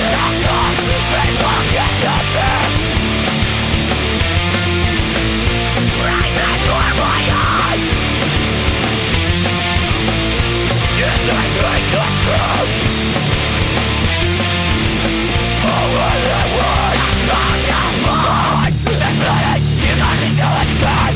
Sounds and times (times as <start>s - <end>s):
Music: 0.0s - 21.1s.